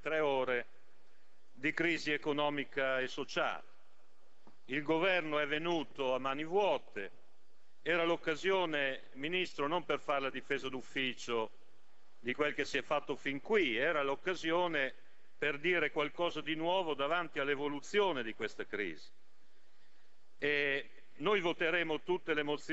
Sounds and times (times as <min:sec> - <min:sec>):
Speech: 0:00.0 - 0:00.7, 0:01.6 - 0:03.6, 0:04.7 - 0:07.1, 0:07.9 - 0:11.5, 0:12.2 - 0:19.1, 0:20.4 - 0:22.7.